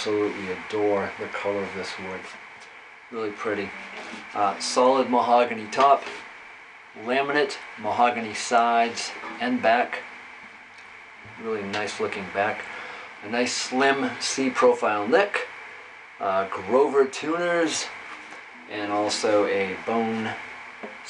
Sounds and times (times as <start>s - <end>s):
Speech: 0.0s - 2.4s, 3.2s - 6.2s, 7.0s - 10.1s, 11.3s - 15.6s, 16.2s - 18.0s, 18.6s - 20.4s.